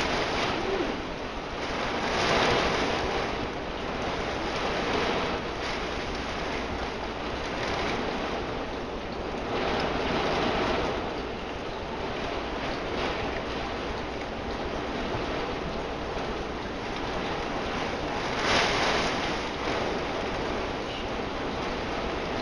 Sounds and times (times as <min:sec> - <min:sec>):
Rain: 0:00.0 - 0:22.4.